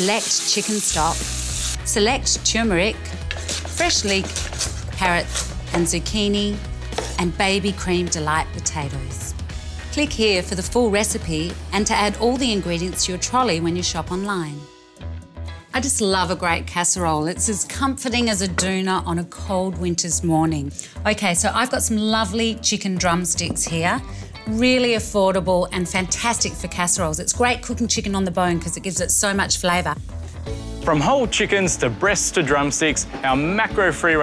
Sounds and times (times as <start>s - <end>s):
Music: 0.0s - 34.2s.